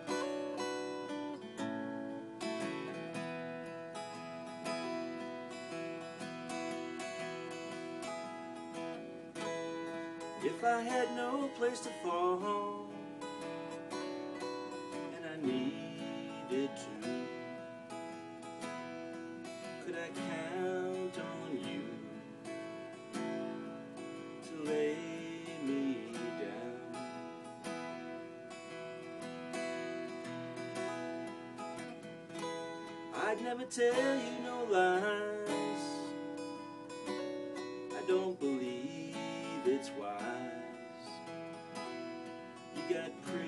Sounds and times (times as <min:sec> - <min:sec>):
Guitar: 0:00.0 - 0:43.4.